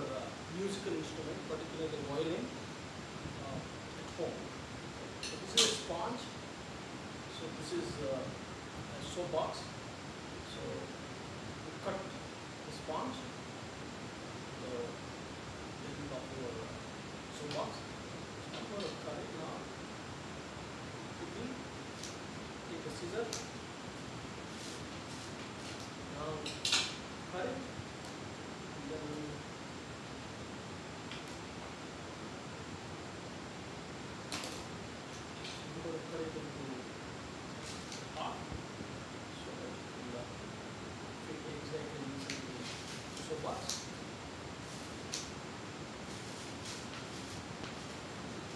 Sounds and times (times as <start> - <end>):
Speech: 0.0 - 2.6, 3.4 - 4.5, 5.2 - 6.4, 7.3 - 9.7, 10.4 - 11.0, 11.6 - 13.4, 14.6 - 15.0, 15.8 - 17.9, 18.6 - 19.7, 21.2 - 21.6, 22.7 - 23.5, 26.1 - 26.6, 27.3 - 27.7, 28.8 - 29.5, 35.4 - 36.9, 38.1 - 38.5, 39.3 - 40.4, 41.2 - 43.9.